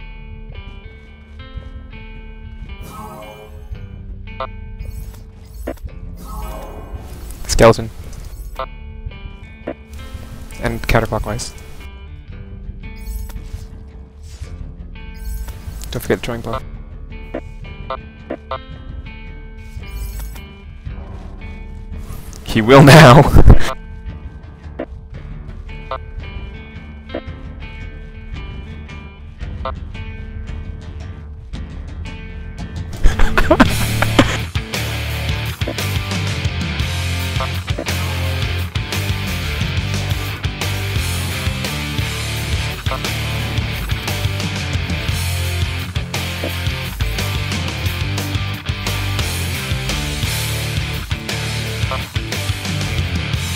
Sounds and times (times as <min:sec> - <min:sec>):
Music: 0:00.0 - 0:53.5
Speech: 0:07.5 - 0:07.9, 0:10.6 - 0:11.6, 0:15.9 - 0:16.6, 0:22.5 - 0:23.4.